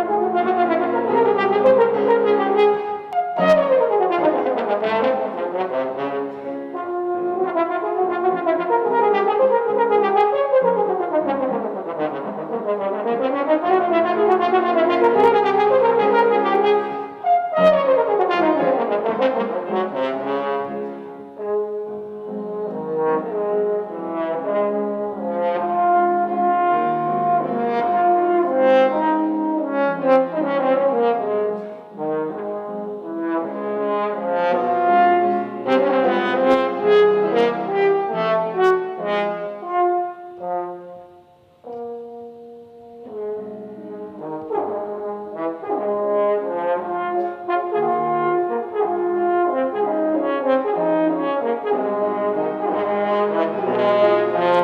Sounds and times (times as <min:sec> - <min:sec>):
Brass instrument: 0:00.0 - 0:54.6.